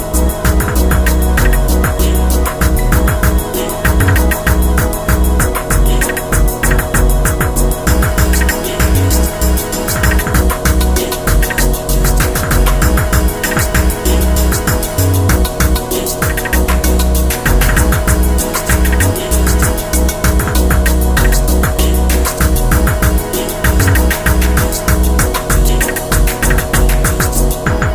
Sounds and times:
Music: 0:00.0 - 0:27.9.

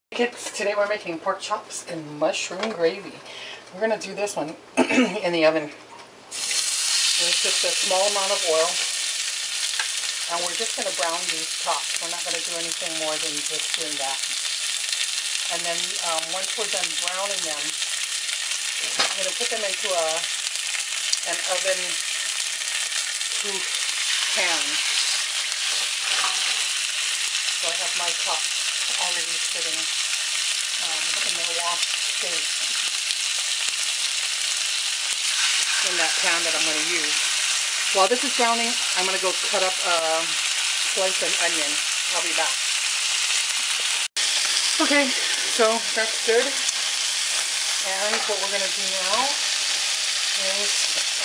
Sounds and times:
Speech: 0:00.1 - 0:05.8, 0:07.2 - 0:08.8, 0:10.3 - 0:14.2, 0:15.5 - 0:17.7, 0:18.8 - 0:20.2, 0:21.3 - 0:22.0, 0:23.4 - 0:23.7, 0:24.3 - 0:24.8, 0:27.6 - 0:29.9, 0:30.8 - 0:32.4, 0:35.8 - 0:37.2, 0:38.0 - 0:40.3, 0:41.0 - 0:42.6, 0:44.8 - 0:46.6, 0:47.8 - 0:49.4, 0:50.4 - 0:51.0.

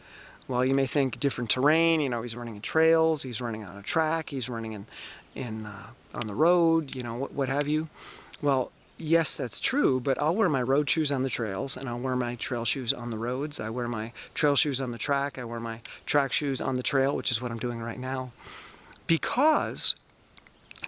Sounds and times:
Speech: 0:00.5 - 0:18.4, 0:19.1 - 0:20.0.

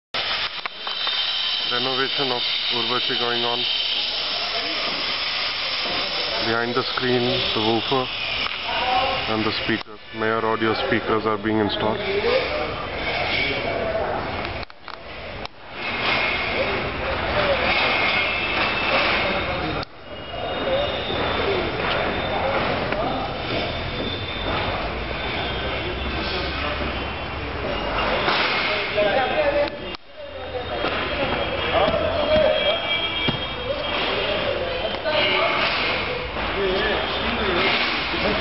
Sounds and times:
Hiss: 0:00.2 - 0:09.7.

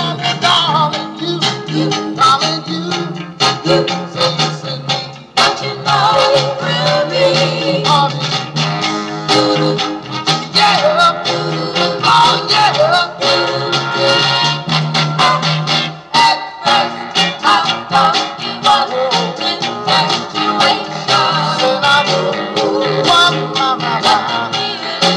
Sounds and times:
Soul music: 0:00.0 - 0:25.1.

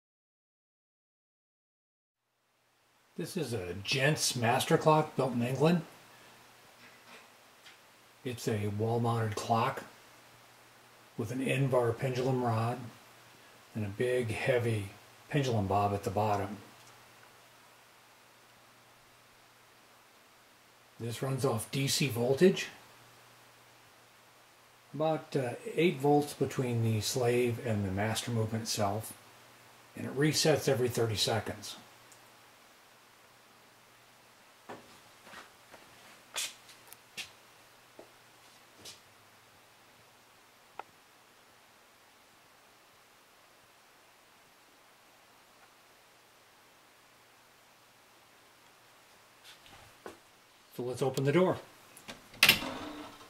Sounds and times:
Speech: 0:03.2 - 0:05.9, 0:08.2 - 0:09.9, 0:11.2 - 0:13.0, 0:13.7 - 0:16.7, 0:21.0 - 0:22.8, 0:25.0 - 0:29.2, 0:30.0 - 0:31.9, 0:50.7 - 0:51.7.

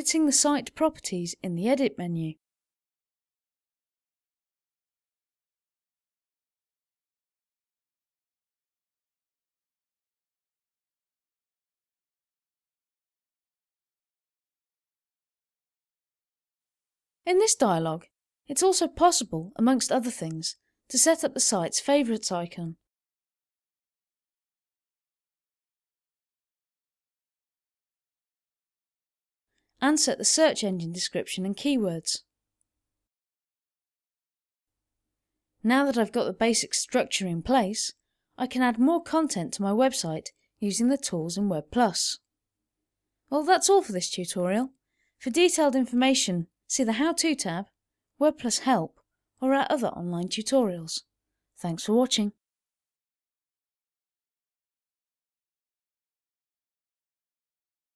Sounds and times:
Speech: 0:00.0 - 0:02.4, 0:17.3 - 0:22.8, 0:29.8 - 0:32.3, 0:35.6 - 0:42.3, 0:43.3 - 0:52.4.

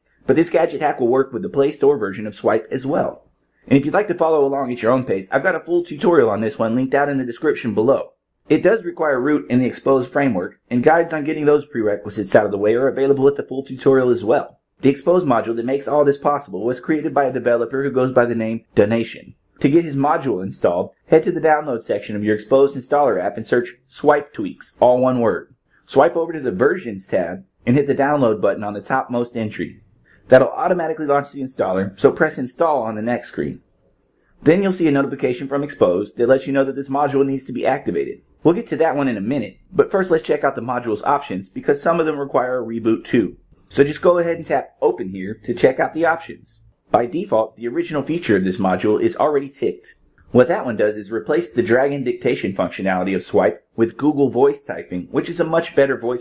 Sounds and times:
Speech: 0:00.3 - 0:33.6, 0:34.4 - 0:56.2.

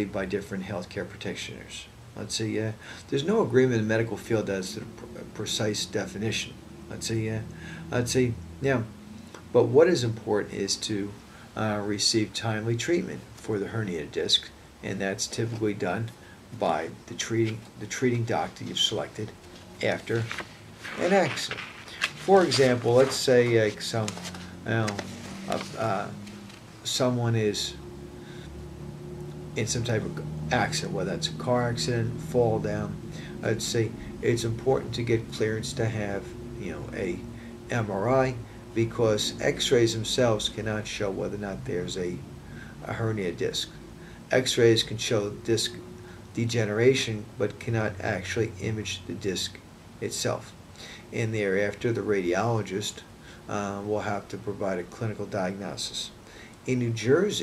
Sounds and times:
Speech: 0:00.0 - 0:08.9, 0:09.5 - 0:26.2, 0:26.8 - 0:27.8, 0:29.6 - 0:42.2, 0:42.8 - 0:45.8, 0:46.4 - 0:57.4.

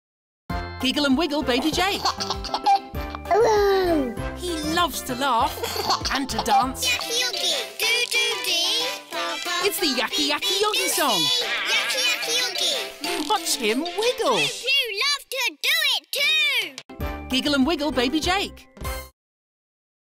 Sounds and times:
Music: 0:00.5 - 0:14.8, 0:16.9 - 0:19.1
Speech: 0:13.1 - 0:18.7.

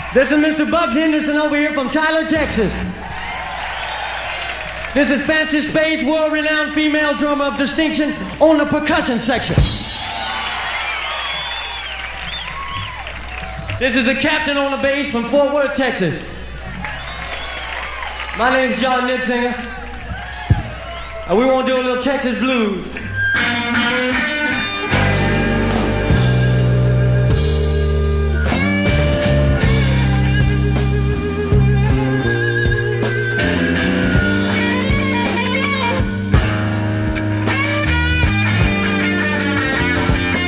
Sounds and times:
Speech: 0:00.2 - 0:02.9, 0:05.0 - 0:09.8, 0:13.8 - 0:16.3, 0:18.4 - 0:19.8, 0:21.3 - 0:23.0
Blues: 0:16.4 - 0:40.4.

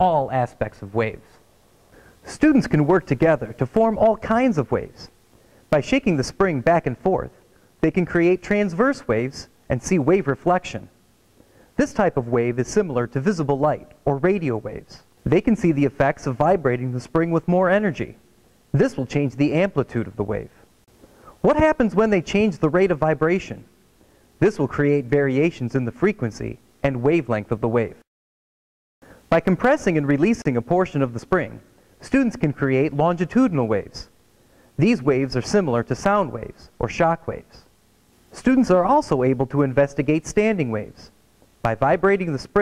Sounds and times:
Speech: 0:00.0 - 0:01.4, 0:02.2 - 0:11.0, 0:11.8 - 0:20.6, 0:21.4 - 0:23.7, 0:24.4 - 0:28.1, 0:29.3 - 0:34.1, 0:34.8 - 0:37.7, 0:38.4 - 0:42.6.

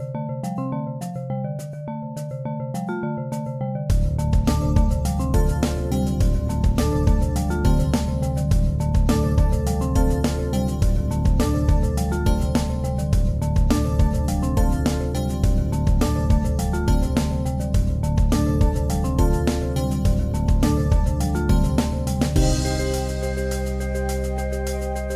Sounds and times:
Music: 0:00.0 - 0:25.1.

